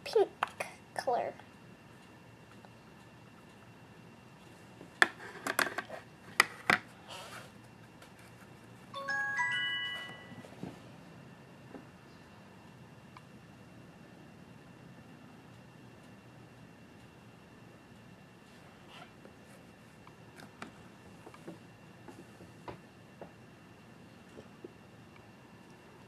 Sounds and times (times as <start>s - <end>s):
Chime: 9.0s - 10.6s.